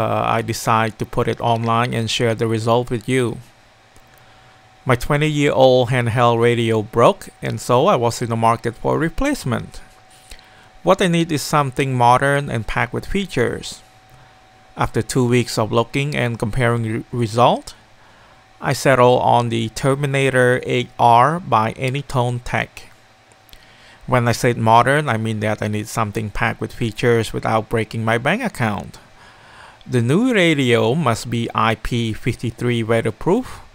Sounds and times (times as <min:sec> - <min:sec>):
Speech: 0:00.0 - 0:03.5, 0:04.9 - 0:09.9, 0:10.8 - 0:13.9, 0:14.8 - 0:17.8, 0:18.6 - 0:23.0, 0:24.1 - 0:29.1, 0:29.9 - 0:33.7.